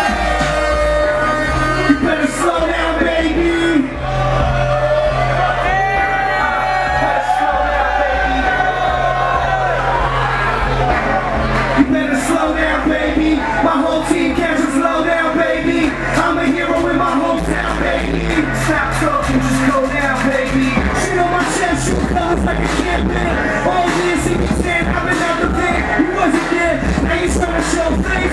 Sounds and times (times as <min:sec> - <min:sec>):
Pop music: 0:00.0 - 0:28.3.